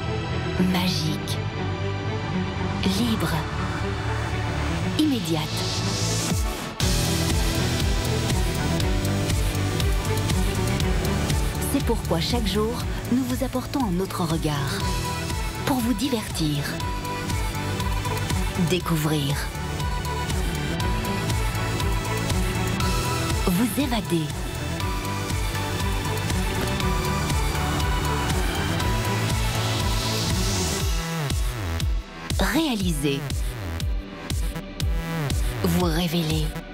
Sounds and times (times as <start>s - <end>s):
Music: 0.0s - 36.7s
Speech: 0.6s - 1.4s, 2.8s - 3.6s, 5.0s - 5.8s, 11.6s - 15.0s, 15.6s - 16.8s, 18.6s - 19.6s, 23.4s - 24.4s, 32.4s - 33.6s, 35.6s - 36.7s.